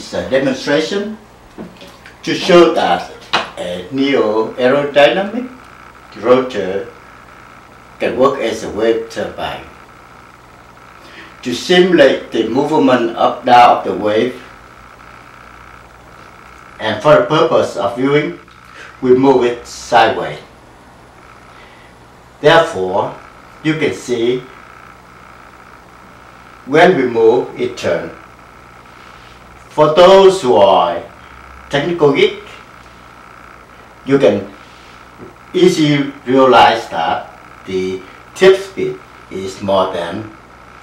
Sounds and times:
Speech: 0.0 - 1.3, 2.2 - 7.0, 8.0 - 9.8, 11.2 - 14.6, 16.8 - 20.5, 22.4 - 24.6, 26.6 - 28.2, 29.7 - 32.6, 34.0 - 34.6, 35.5 - 40.4.

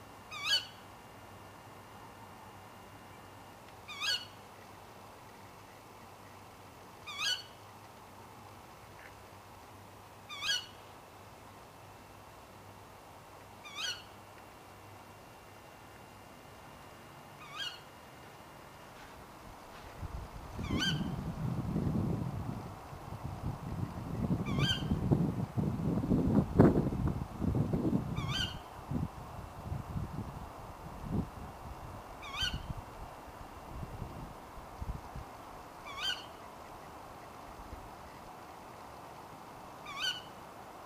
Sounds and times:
Bird: 0.3 - 0.8, 3.9 - 4.4, 7.1 - 7.6, 10.3 - 10.8, 13.6 - 14.1, 17.4 - 17.9, 20.6 - 21.2, 24.4 - 25.0, 28.2 - 28.7, 32.2 - 32.7, 35.8 - 37.4, 39.8 - 40.3.

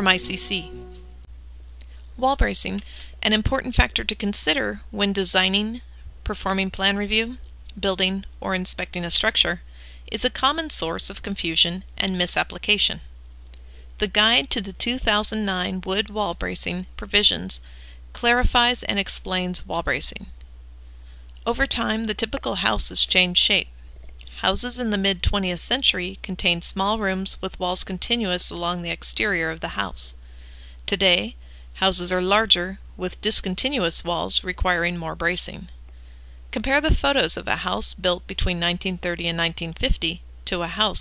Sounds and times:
Speech: 0.0 - 1.0, 2.2 - 13.1, 14.0 - 17.6, 18.2 - 20.4, 21.4 - 23.7, 24.3 - 30.2, 30.9 - 35.8, 36.5 - 41.0.

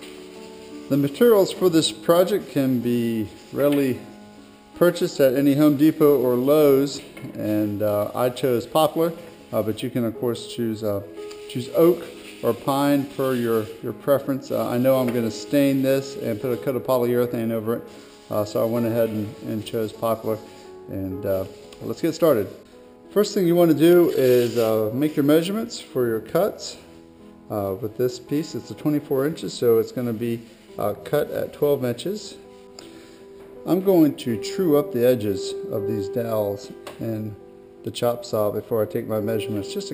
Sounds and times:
Music: 0.0 - 39.9
Speech: 0.9 - 4.0, 4.8 - 22.6, 23.2 - 26.8, 27.5 - 32.4, 33.7 - 39.9.

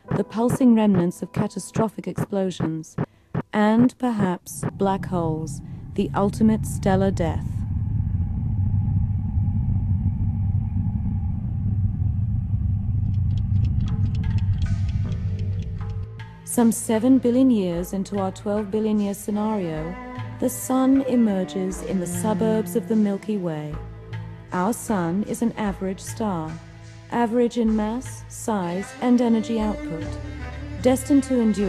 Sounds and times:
Music: 0.0 - 7.5, 13.1 - 31.6
Speech: 0.1 - 7.6, 16.5 - 23.8, 24.5 - 26.6, 27.2 - 30.2.

